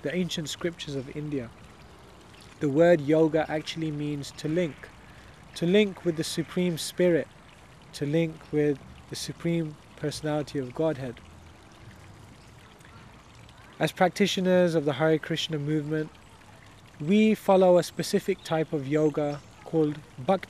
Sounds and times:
Speech: 0:00.0 - 0:01.5, 0:02.6 - 0:04.9, 0:05.6 - 0:07.3, 0:08.0 - 0:11.2, 0:13.8 - 0:16.1, 0:17.0 - 0:20.5.

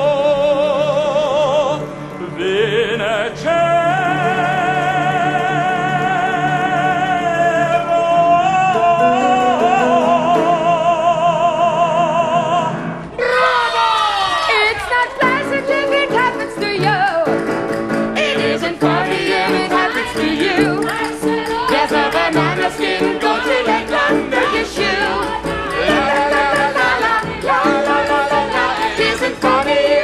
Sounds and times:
Singing: 0:00.0 - 0:17.3, 0:18.2 - 0:30.0
Opera: 0:00.0 - 0:30.0.

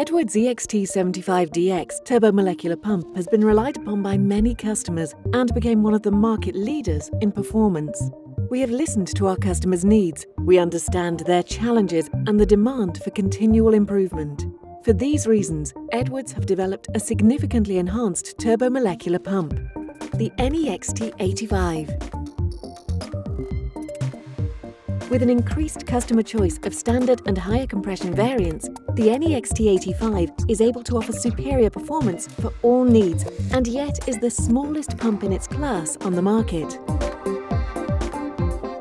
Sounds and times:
Speech: 0:00.0 - 0:19.6, 0:20.2 - 0:22.0, 0:25.1 - 0:36.8
Music: 0:00.0 - 0:38.8.

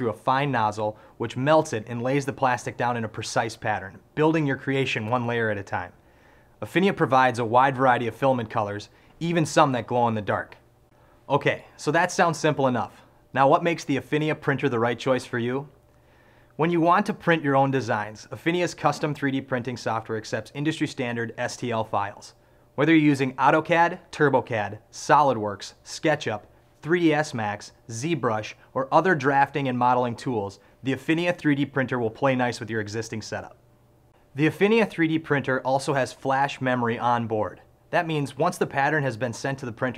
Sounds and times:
Speech: 0:00.0 - 0:06.0, 0:06.6 - 0:10.6, 0:11.3 - 0:15.8, 0:16.6 - 0:33.6, 0:34.4 - 0:39.9.

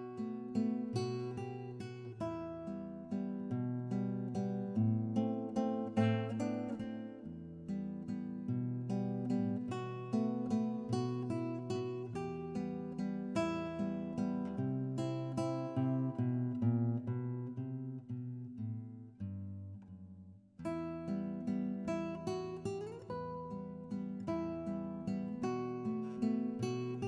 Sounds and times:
Acoustic guitar: 0:00.0 - 0:27.0.

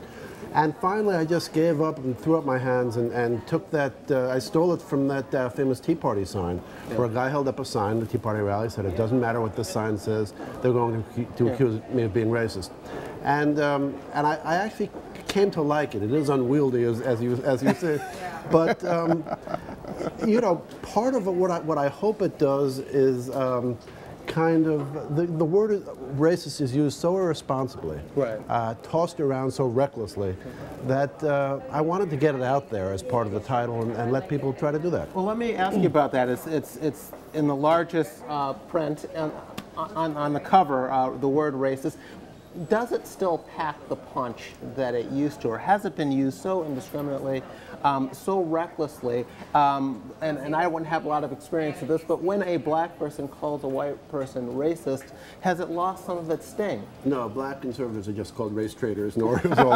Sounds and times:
Speech: 0:42.6 - 0:59.7.

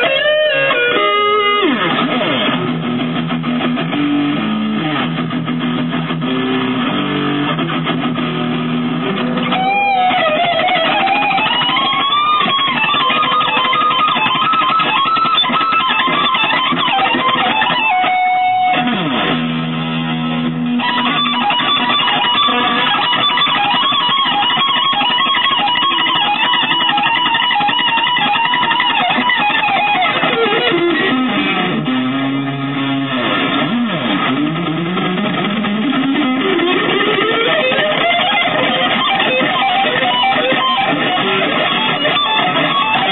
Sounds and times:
Electric guitar: 0:00.0 - 0:43.1.

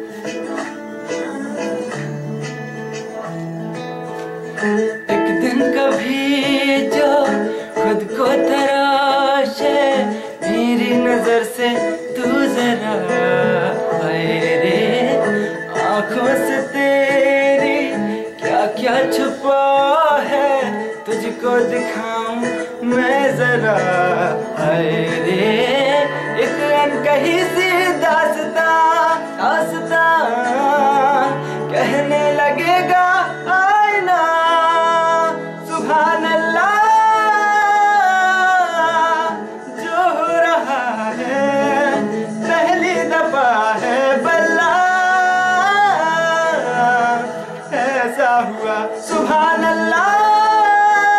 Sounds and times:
Inside, small room: 0:00.0 - 0:51.1
Music: 0:00.0 - 0:51.1.

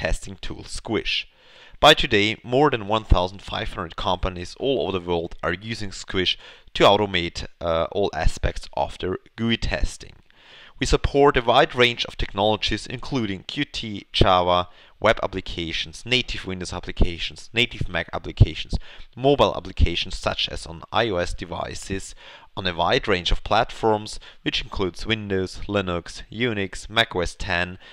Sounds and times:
Speech: 0:00.0 - 0:10.2, 0:10.8 - 0:27.8.

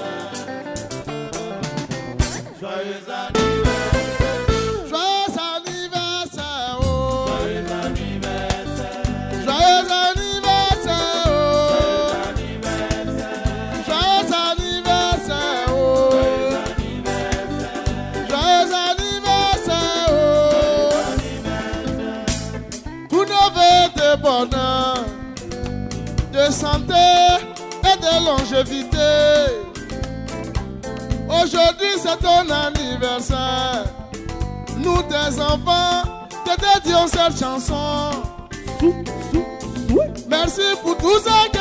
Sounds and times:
Music: 0:00.0 - 0:41.6.

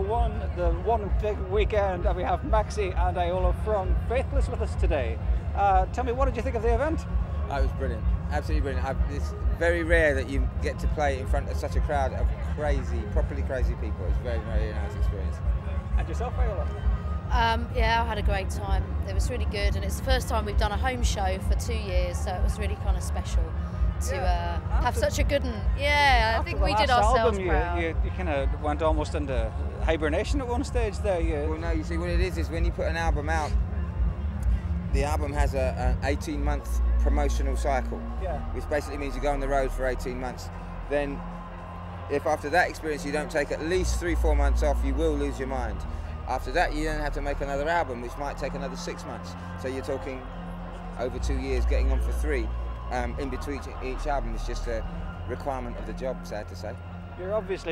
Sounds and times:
Music: 0:00.0 - 0:57.7.

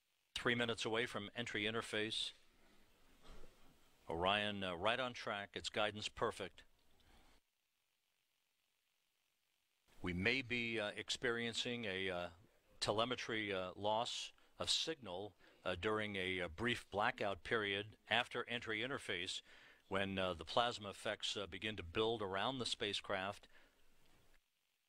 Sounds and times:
Speech: 0:00.4 - 0:02.4, 0:04.1 - 0:06.7, 0:10.0 - 0:23.5.

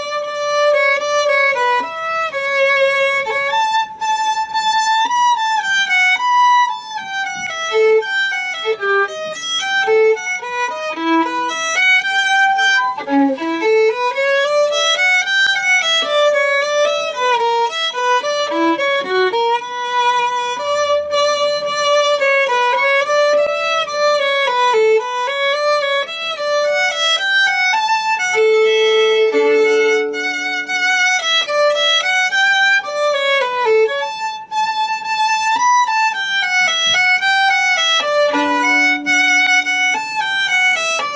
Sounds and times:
Violin, fiddle: 0:00.0 - 0:41.1.

